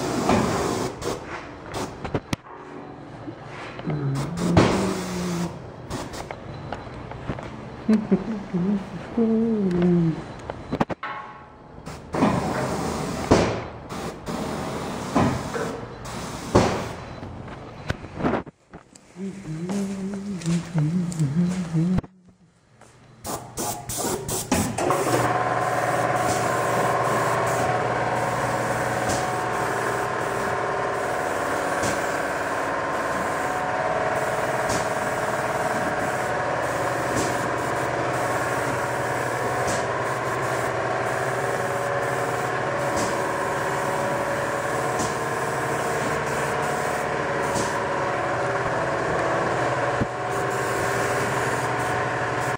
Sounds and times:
Spray: 0:00.0 - 0:02.0, 0:04.2 - 0:06.3, 0:11.9 - 0:17.0, 0:23.2 - 0:47.8, 0:50.3 - 0:52.5.

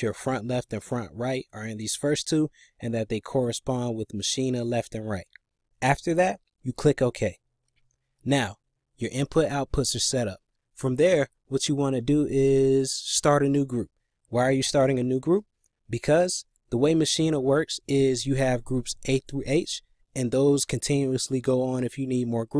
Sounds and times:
Speech: 0:00.0 - 0:07.4, 0:08.2 - 0:22.5.

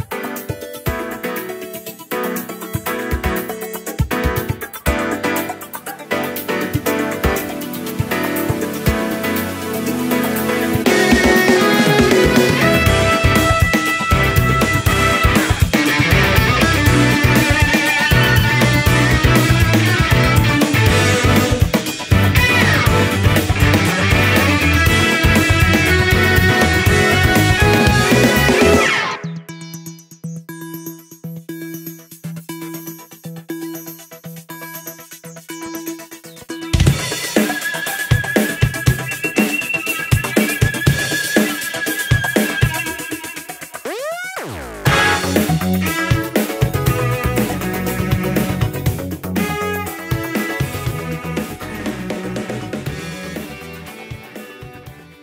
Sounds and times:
Double bass: 0:22.2 - 0:28.8, 0:46.7 - 0:49.9.

